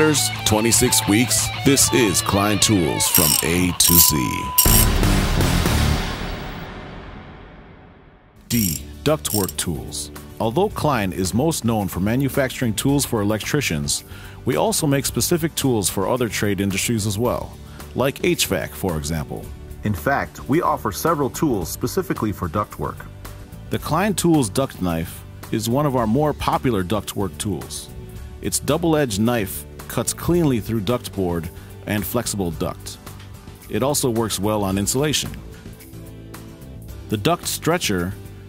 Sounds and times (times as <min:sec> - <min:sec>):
Speech: 0:00.0 - 0:04.6, 0:08.5 - 0:23.1, 0:23.7 - 0:33.0, 0:33.6 - 0:35.4, 0:37.1 - 0:38.2
Music: 0:00.0 - 0:38.4.